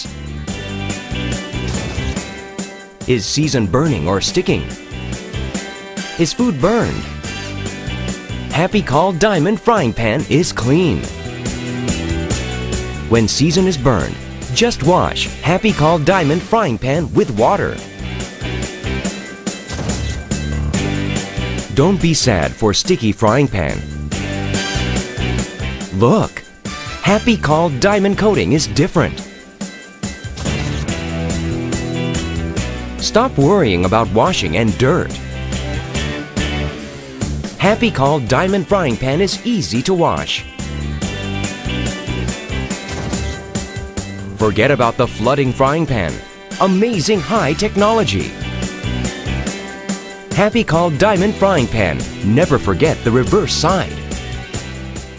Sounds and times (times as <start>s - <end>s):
Music: 0.0s - 55.1s
Speech: 3.1s - 4.7s, 6.2s - 7.1s, 8.5s - 11.1s, 13.1s - 17.8s, 21.7s - 23.8s, 25.9s - 26.4s, 27.0s - 29.2s, 33.0s - 35.2s, 37.6s - 40.5s, 44.3s - 48.4s, 50.4s - 54.0s.